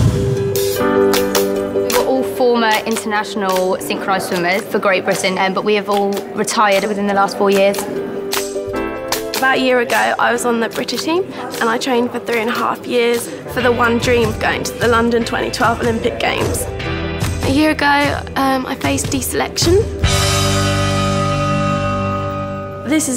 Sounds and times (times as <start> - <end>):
Female speech, woman speaking: 1.9 - 7.9, 9.4 - 16.7, 17.4 - 20.0, 22.8 - 23.1.